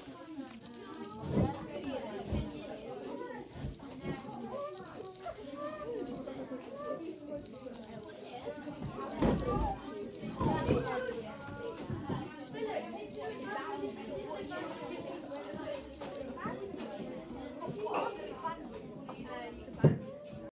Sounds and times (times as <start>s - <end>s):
Speech: 0.0s - 20.5s.